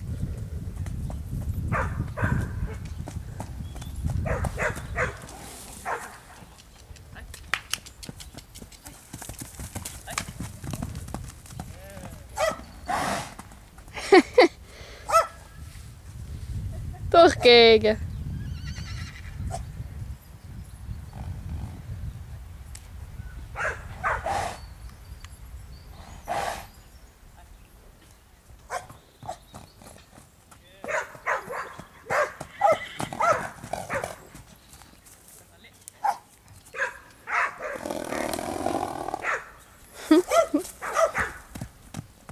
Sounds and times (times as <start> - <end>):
Clip-clop: 0.0 - 22.0, 28.0 - 42.3.